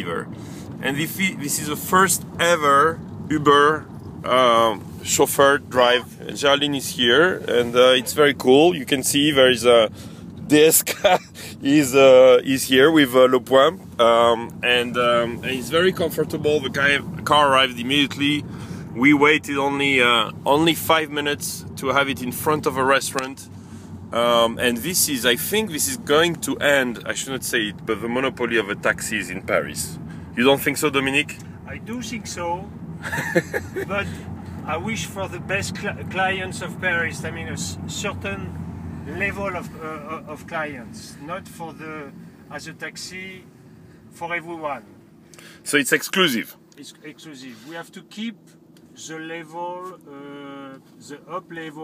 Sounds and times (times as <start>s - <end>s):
Speech: 0.0s - 9.9s, 10.5s - 10.9s, 11.6s - 18.4s, 19.0s - 23.5s, 24.1s - 32.7s, 33.8s - 38.5s, 39.1s - 43.4s, 44.2s - 44.9s, 45.6s - 51.8s.